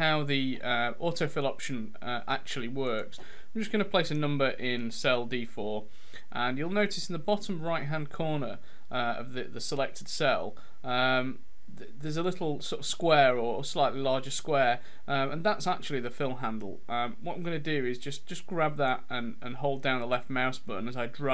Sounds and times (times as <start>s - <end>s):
Speech: 0.0s - 21.3s.